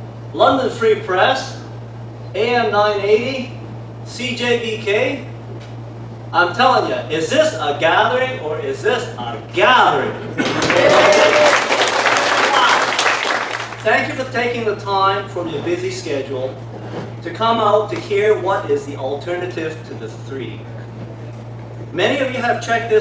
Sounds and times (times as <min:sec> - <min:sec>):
Narration, monologue: 0:00.1 - 0:10.4, 0:13.7 - 0:23.0
Male speech, man speaking: 0:00.4 - 0:01.7, 0:02.4 - 0:05.3, 0:06.4 - 0:10.2, 0:12.4 - 0:12.9, 0:13.8 - 0:16.6, 0:17.2 - 0:20.7, 0:21.9 - 0:23.0.